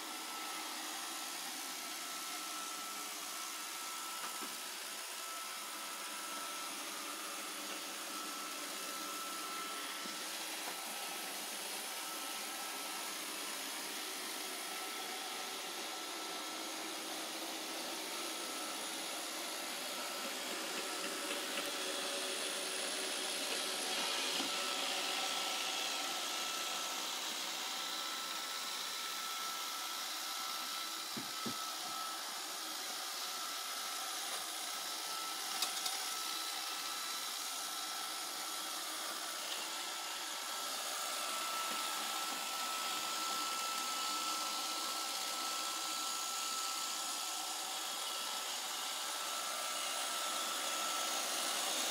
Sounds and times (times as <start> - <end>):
Vacuum cleaner: 0.0 - 51.9.